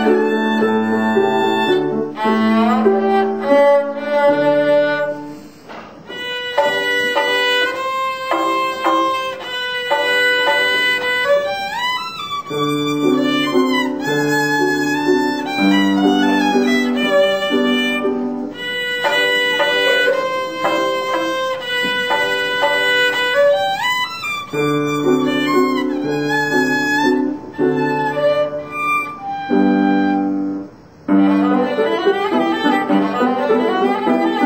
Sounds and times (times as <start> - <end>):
Classical music: 0.0 - 34.4
Violin, fiddle: 0.0 - 34.4
Traditional music: 6.1 - 30.4.